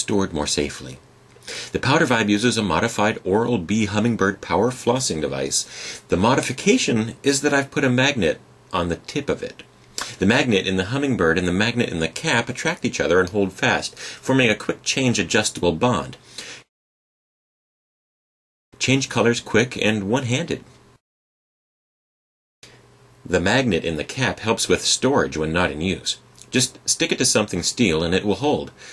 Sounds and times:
Speech: 0.0s - 1.0s, 1.7s - 16.2s, 18.8s - 20.7s, 23.3s - 28.8s.

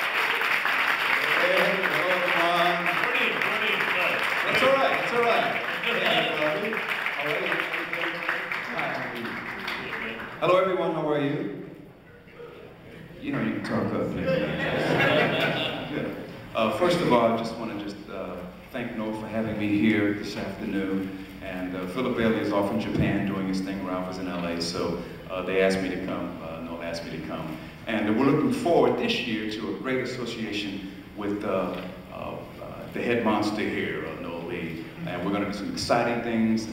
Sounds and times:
Speech: 1.4s - 11.6s, 13.2s - 15.1s, 15.8s - 36.7s.

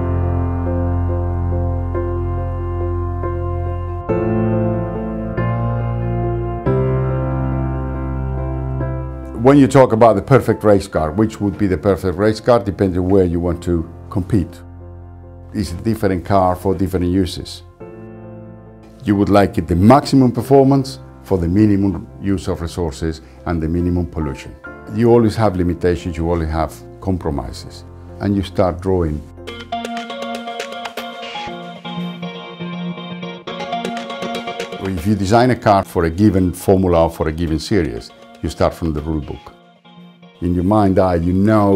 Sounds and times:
Music: 0.0s - 41.7s
Speech: 9.3s - 14.6s, 15.5s - 17.7s, 19.0s - 29.3s, 34.8s - 39.5s, 40.4s - 41.7s.

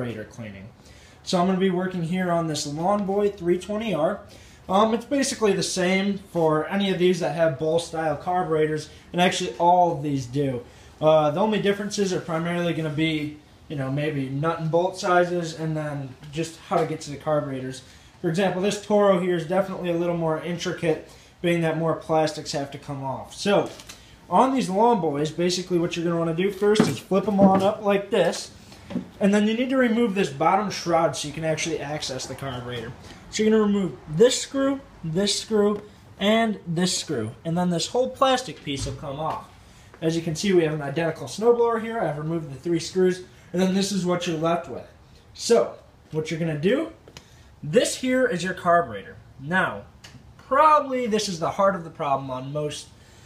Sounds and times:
Speech: 0.0s - 28.5s, 29.2s - 47.0s, 47.6s - 52.9s.

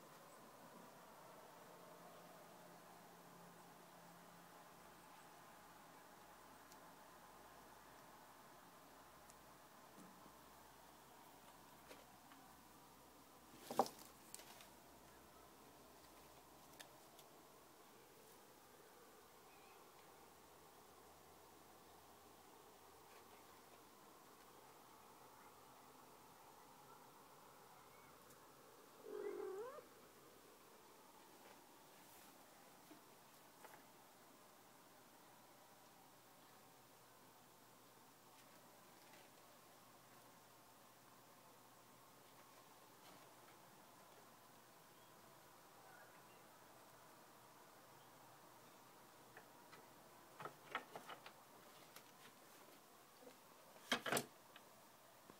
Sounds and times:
Caterwaul: 29.0s - 29.9s.

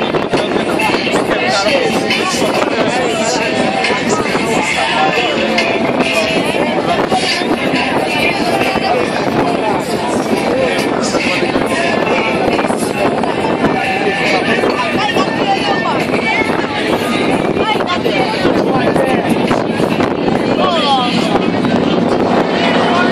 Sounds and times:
Speech: 0.0s - 23.1s.

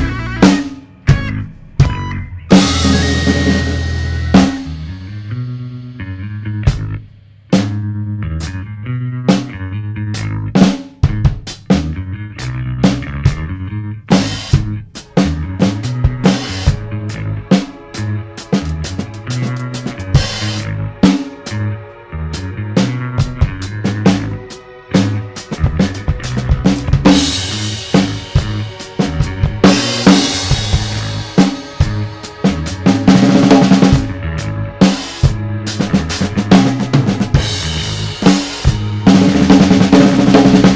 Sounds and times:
Bass drum: 0.0s - 40.7s
Drum kit: 0.0s - 40.7s
Progressive rock: 0.0s - 40.7s.

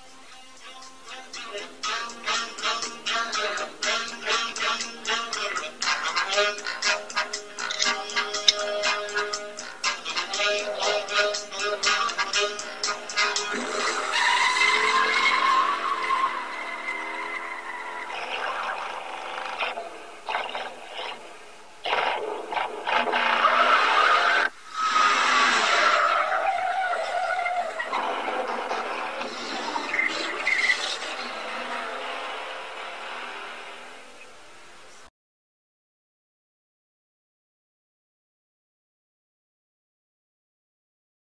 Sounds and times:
Car: 13.0s - 35.1s.

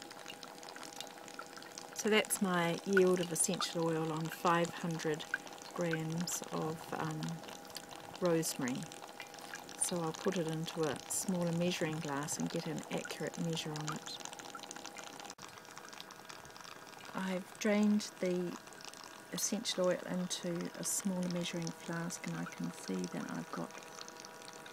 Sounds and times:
Speech: 2.0s - 5.2s, 5.8s - 7.4s, 8.2s - 8.9s, 9.8s - 14.2s, 17.2s - 18.6s, 19.4s - 23.7s.

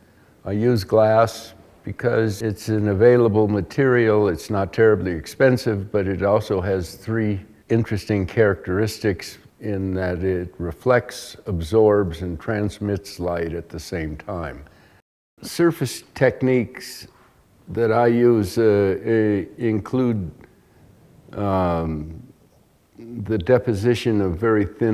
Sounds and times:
Speech: 0.4s - 14.7s, 15.4s - 20.5s, 21.3s - 22.3s, 23.0s - 24.9s.

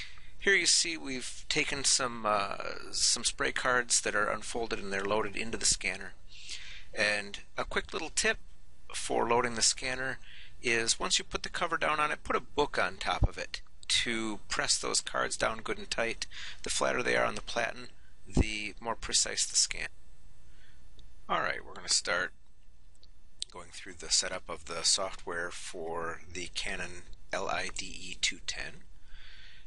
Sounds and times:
Speech: 0.4s - 6.2s, 6.9s - 19.9s, 21.3s - 22.4s, 23.4s - 28.8s.

